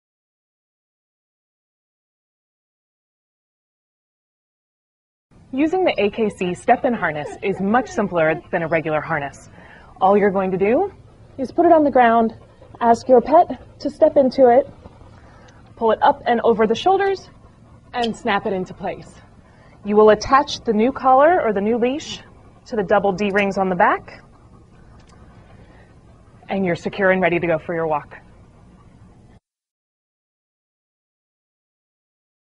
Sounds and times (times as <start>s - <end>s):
Speech: 5.6s - 14.7s, 15.8s - 17.3s, 18.0s - 19.2s, 19.8s - 24.2s, 26.5s - 28.2s.